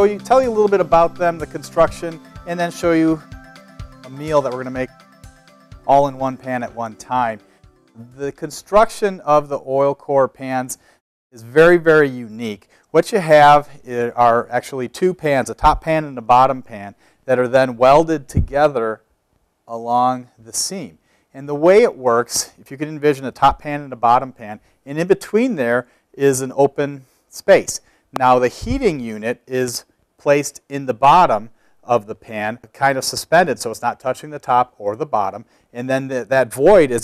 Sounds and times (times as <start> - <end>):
Speech: 0.0 - 3.2, 4.1 - 4.9, 5.9 - 7.4, 8.0 - 10.8, 11.4 - 19.0, 19.7 - 37.0.